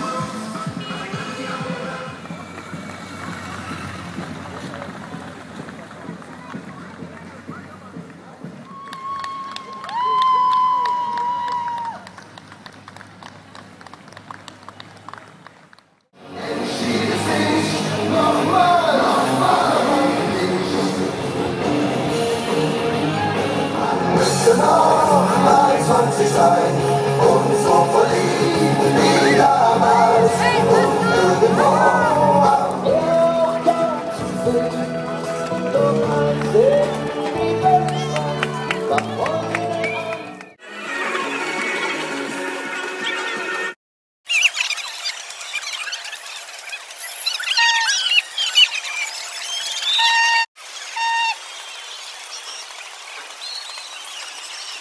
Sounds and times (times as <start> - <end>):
Crowd: 0.0 - 43.8.